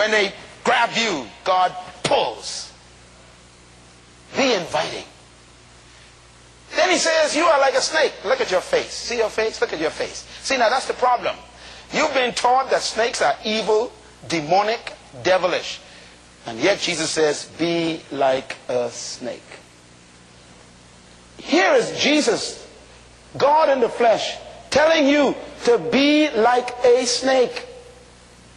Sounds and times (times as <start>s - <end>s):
Speech: 0.0s - 2.8s, 4.3s - 5.2s, 6.7s - 19.6s, 21.4s - 27.9s.